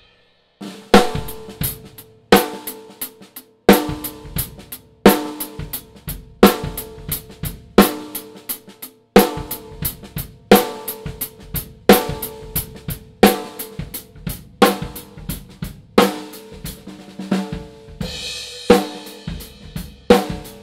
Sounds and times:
Cymbal: 0.0 - 20.6
Drum: 0.0 - 20.6
Drum kit: 0.0 - 20.6.

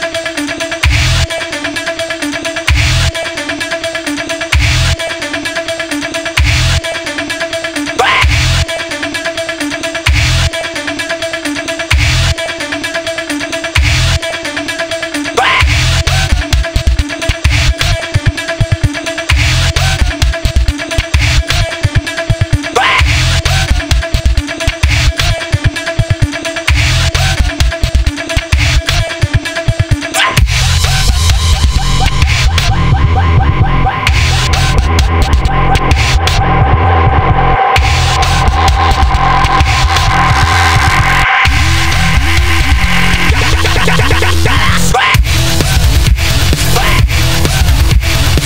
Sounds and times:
Music: 0.0 - 48.4.

